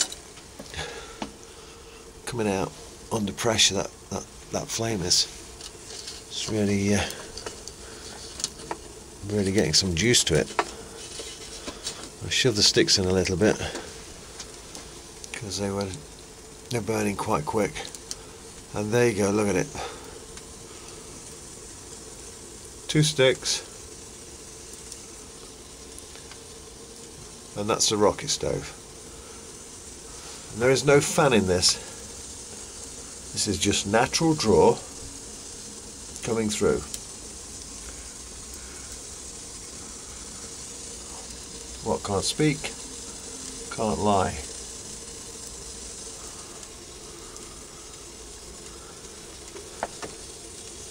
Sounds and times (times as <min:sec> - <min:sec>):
Fire: 0:00.0 - 0:50.9.